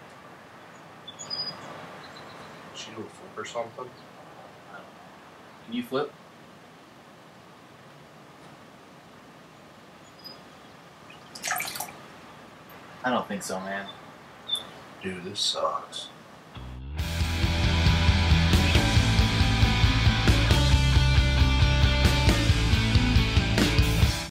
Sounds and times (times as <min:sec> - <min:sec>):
Speech: 0:02.8 - 0:04.0, 0:05.7 - 0:06.2, 0:13.0 - 0:14.0, 0:15.0 - 0:16.2
Music: 0:16.6 - 0:24.3.